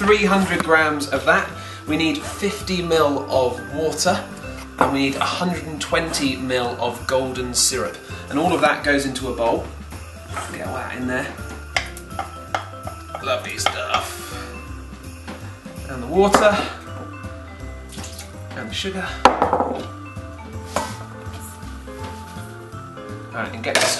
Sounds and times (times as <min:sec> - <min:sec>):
Speech: 0:00.0 - 0:04.2, 0:04.9 - 0:09.6, 0:10.5 - 0:11.4, 0:13.2 - 0:14.1, 0:15.9 - 0:16.8, 0:18.6 - 0:19.2, 0:23.3 - 0:23.9
Music: 0:00.0 - 0:23.9.